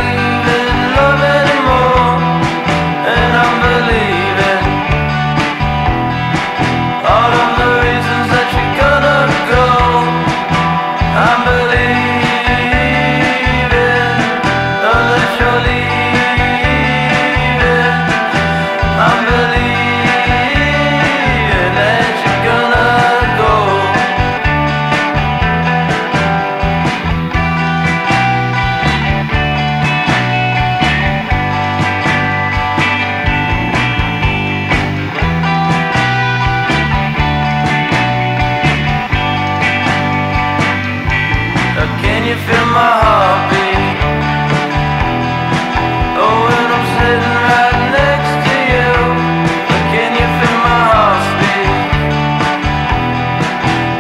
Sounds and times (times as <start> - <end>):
Music: 0.0 - 54.0.